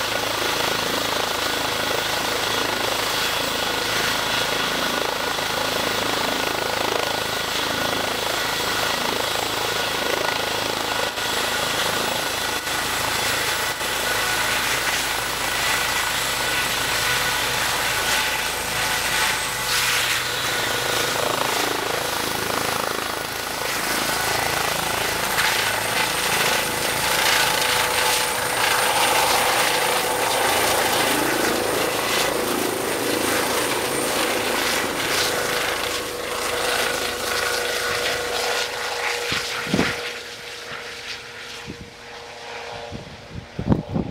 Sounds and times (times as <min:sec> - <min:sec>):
Helicopter: 0:00.0 - 0:44.1.